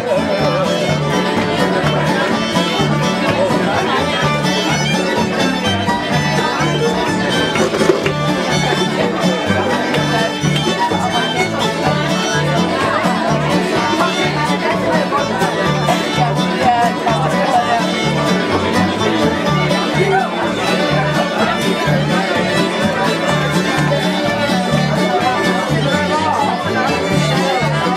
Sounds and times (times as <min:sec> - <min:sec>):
Music: 0:00.0 - 0:27.9
Speech: 0:00.0 - 0:27.9.